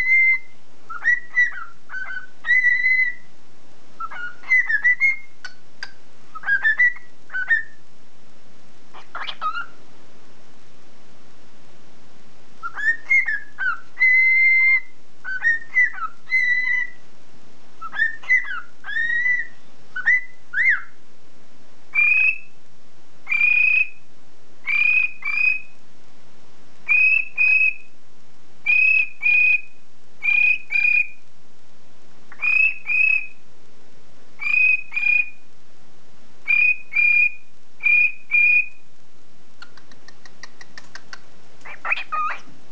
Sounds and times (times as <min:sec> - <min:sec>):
Bird: 0:00.0 - 0:03.3, 0:04.0 - 0:07.8, 0:08.9 - 0:09.8, 0:12.6 - 0:17.0, 0:17.8 - 0:21.0, 0:21.9 - 0:22.5, 0:23.3 - 0:24.0, 0:24.6 - 0:25.8, 0:26.9 - 0:27.9, 0:28.6 - 0:31.2, 0:32.3 - 0:33.4, 0:34.4 - 0:35.4, 0:36.5 - 0:38.8, 0:39.6 - 0:42.5.